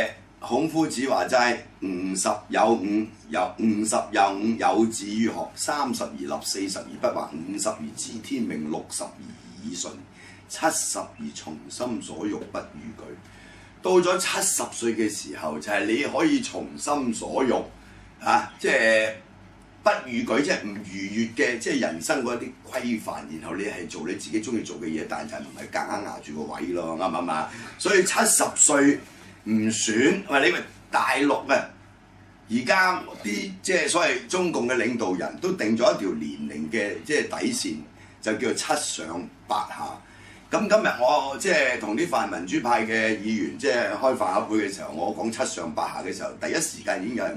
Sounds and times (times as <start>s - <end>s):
Speech: 0.0s - 13.2s, 13.8s - 31.8s, 32.5s - 47.3s.